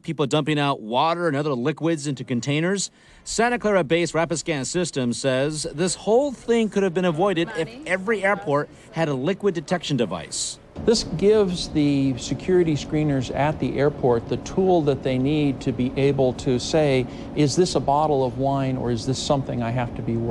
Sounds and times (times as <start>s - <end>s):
Speech: 0.0s - 20.3s.